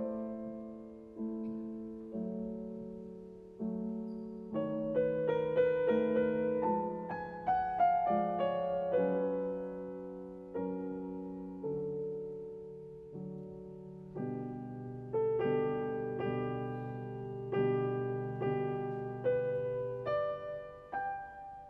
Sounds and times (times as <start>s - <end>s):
Music: 0.0s - 21.6s.